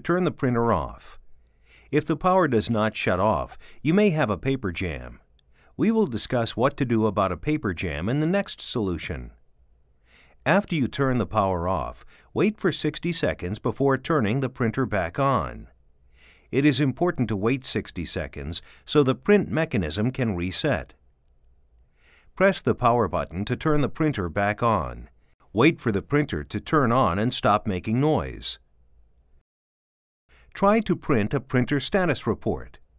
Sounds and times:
Speech: 0.0s - 1.2s, 1.9s - 5.2s, 5.8s - 9.4s, 10.4s - 15.7s, 16.5s - 21.0s, 22.4s - 28.6s, 30.6s - 32.8s.

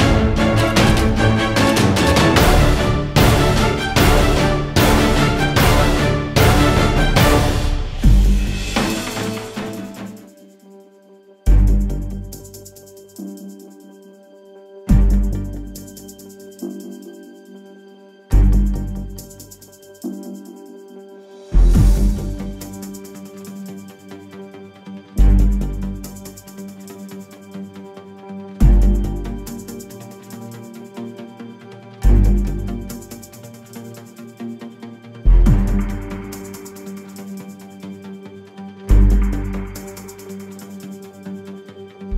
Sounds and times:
Music: 0.0s - 42.1s.

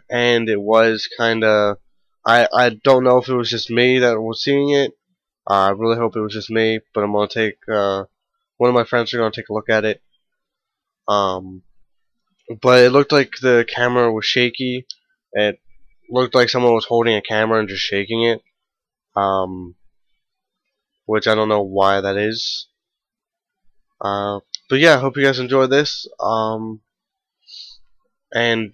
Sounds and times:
Speech: 0.0s - 10.0s, 11.1s - 11.7s, 12.5s - 18.5s, 19.2s - 19.8s, 21.1s - 22.8s, 24.0s - 26.8s, 28.4s - 28.7s.

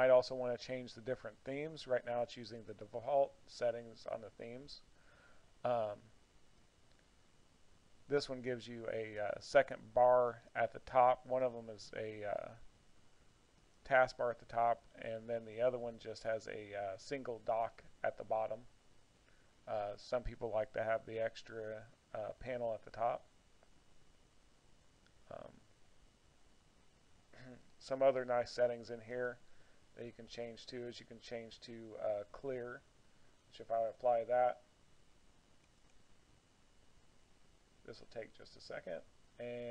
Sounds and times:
Speech: 0.0s - 4.9s, 5.6s - 6.2s, 8.1s - 12.7s, 13.8s - 18.7s, 19.7s - 23.3s, 25.2s - 25.6s, 27.4s - 29.4s, 30.0s - 32.9s, 33.5s - 34.7s, 37.8s - 39.7s.

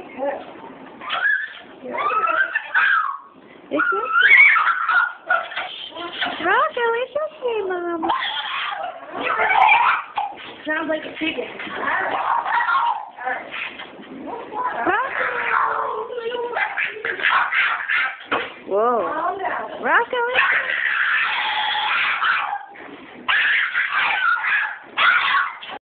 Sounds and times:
Speech: 6.0s - 8.1s, 14.2s - 17.2s, 18.7s - 20.4s.

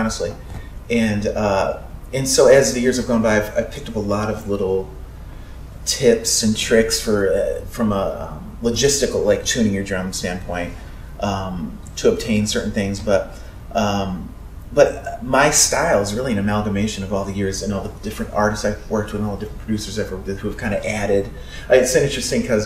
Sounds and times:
Speech: 0.0s - 5.0s, 5.8s - 22.6s.

